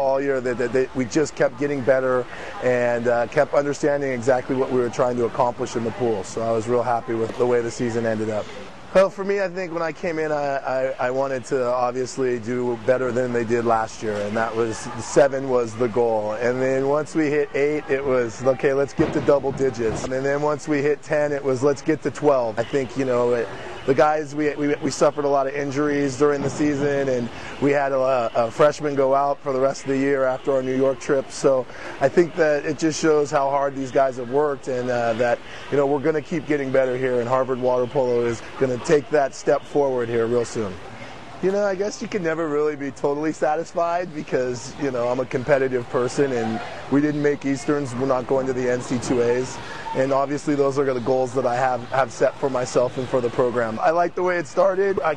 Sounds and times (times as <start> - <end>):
Speech: 0.0 - 40.8, 41.4 - 55.1.